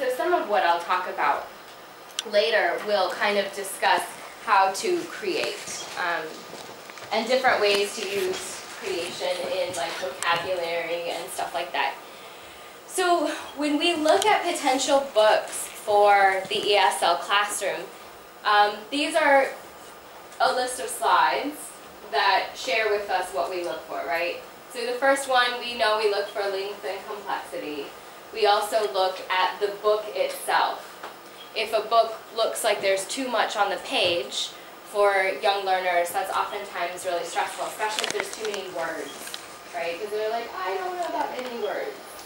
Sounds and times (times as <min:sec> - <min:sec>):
Speech: 0:00.0 - 0:01.5, 0:02.2 - 0:06.4, 0:07.1 - 0:12.0, 0:12.9 - 0:19.6, 0:20.4 - 0:30.9, 0:31.6 - 0:42.2.